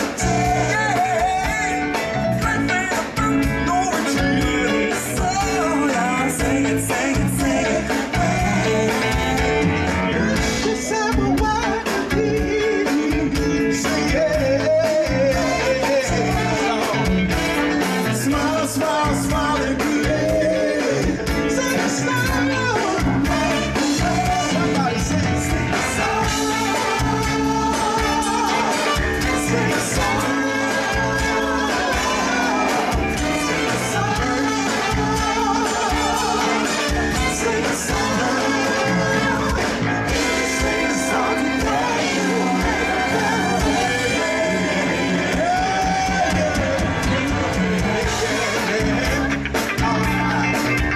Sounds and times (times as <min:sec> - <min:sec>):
Music of Latin America: 0:00.0 - 0:50.9.